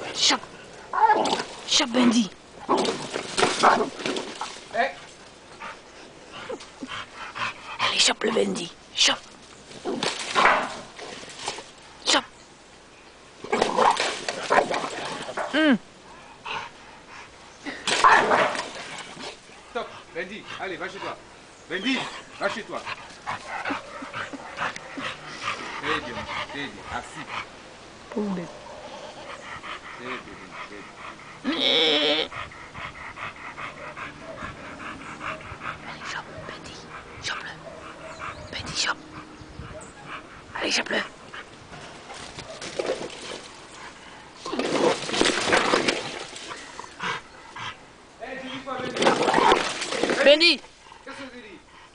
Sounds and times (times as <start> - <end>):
Bleat: 31.4 - 32.3.